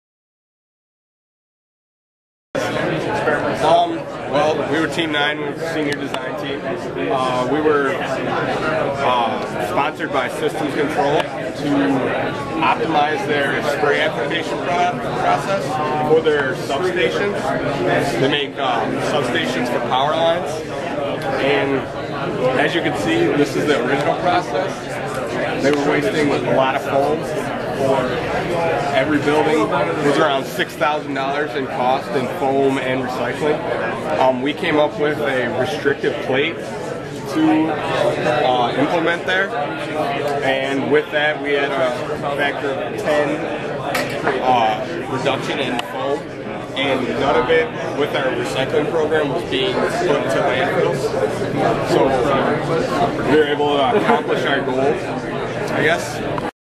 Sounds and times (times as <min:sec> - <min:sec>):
Speech: 0:02.6 - 0:56.6.